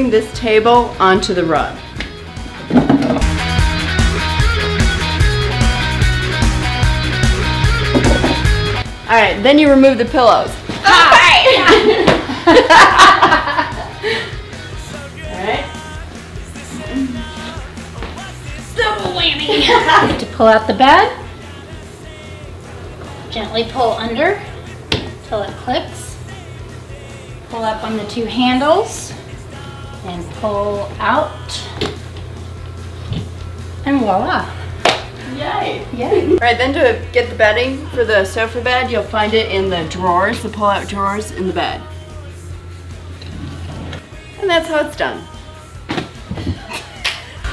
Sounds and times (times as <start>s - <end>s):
Music: 0.0s - 47.5s.